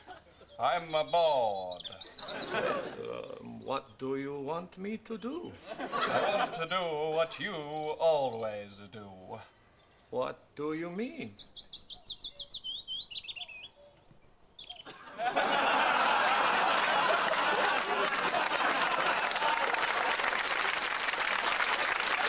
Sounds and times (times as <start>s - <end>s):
Chirp, tweet: 0.0s - 2.6s, 9.2s - 14.9s.